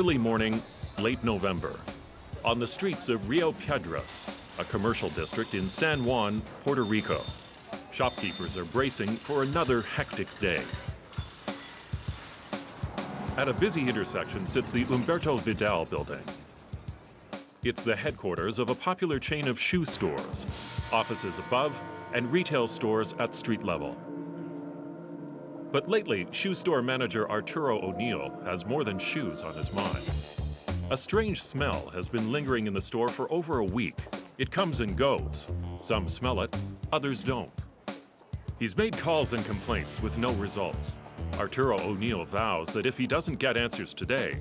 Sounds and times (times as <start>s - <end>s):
Speech: 0.0s - 10.8s, 13.4s - 16.4s, 17.6s - 24.0s, 25.8s - 30.2s, 30.9s - 37.6s, 38.6s - 44.4s
Music: 0.0s - 44.4s.